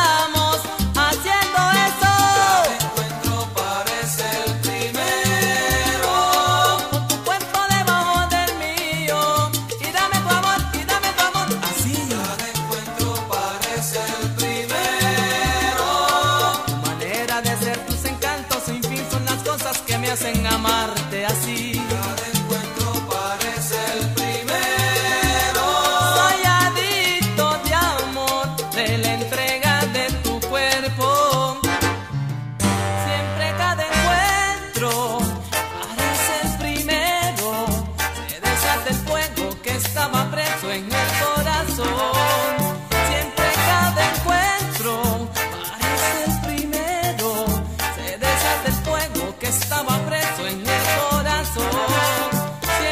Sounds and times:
Soul music: 0:00.0 - 0:52.9.

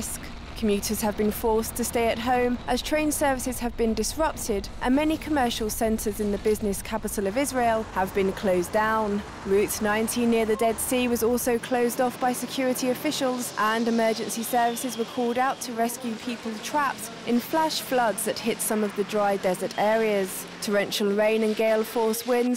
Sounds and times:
Speech: 0:00.0 - 0:22.5.

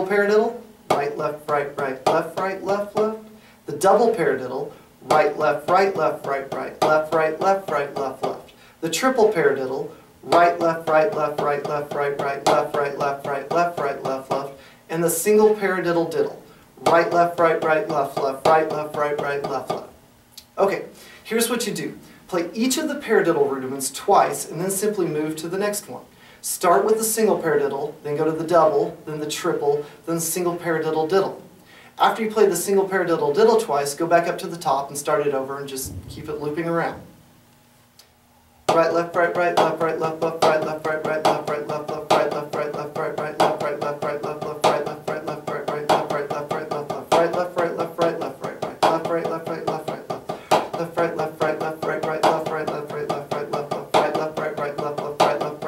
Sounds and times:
Speech: 0:00.0 - 0:19.9, 0:20.6 - 0:31.4, 0:32.0 - 0:37.1
Drum: 0:00.9 - 0:03.2, 0:05.1 - 0:08.5, 0:10.3 - 0:14.5, 0:35.8 - 0:37.5, 0:38.7 - 0:55.6.

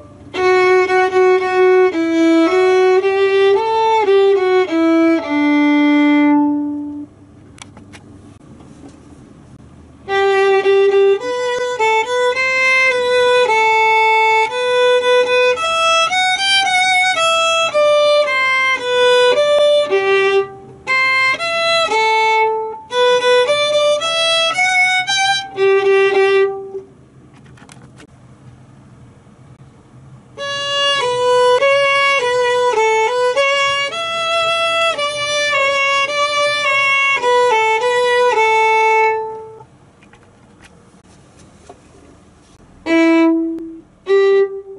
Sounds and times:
Violin, fiddle: 0:00.0 - 0:07.1, 0:10.0 - 0:26.9, 0:30.4 - 0:39.7, 0:42.8 - 0:44.7.

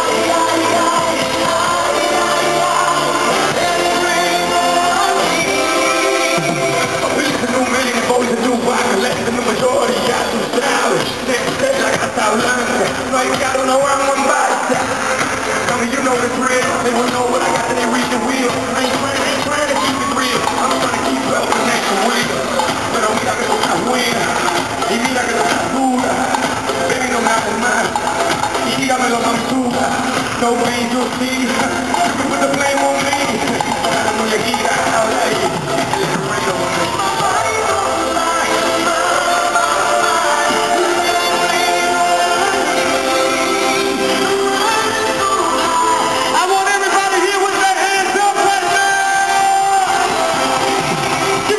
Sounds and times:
Music: 0:00.0 - 0:51.5.

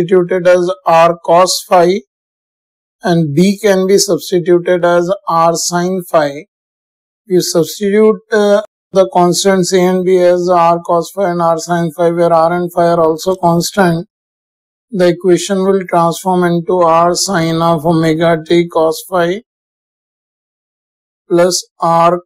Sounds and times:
Speech: 0:00.0 - 0:02.0, 0:03.0 - 0:06.5, 0:07.3 - 0:14.1, 0:14.9 - 0:19.4, 0:21.3 - 0:22.2.

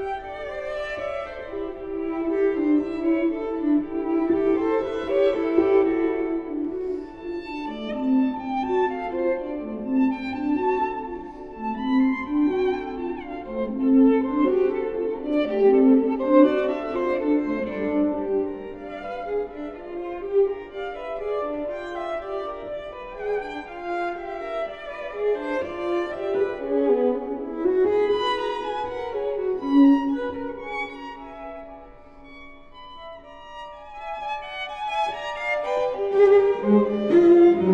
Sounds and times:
Cello: 0:00.0 - 0:37.7
Violin, fiddle: 0:00.0 - 0:37.7.

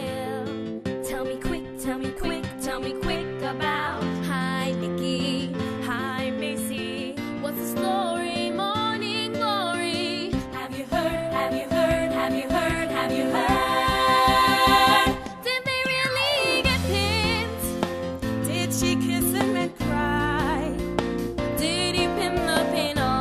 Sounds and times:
Music: 0:00.0 - 0:23.2.

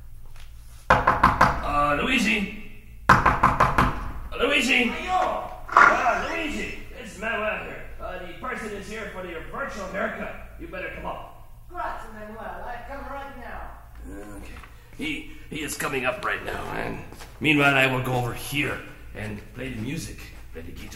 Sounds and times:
Speech: 0:01.6 - 0:02.6, 0:04.4 - 0:20.9.

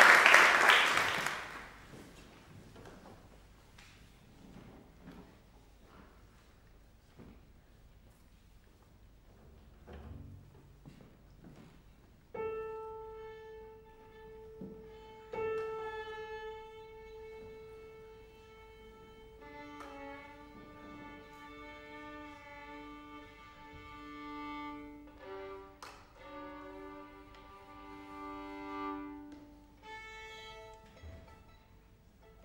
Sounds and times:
Violin, fiddle: 0:12.4 - 0:32.4.

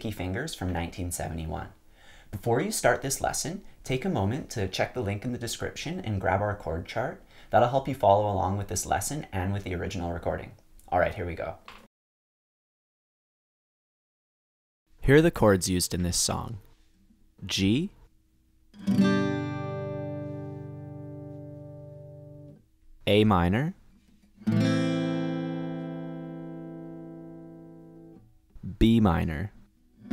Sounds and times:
Speech: 0:00.0 - 0:11.7, 0:15.0 - 0:16.7, 0:17.4 - 0:18.0, 0:23.1 - 0:23.8, 0:28.6 - 0:29.6.

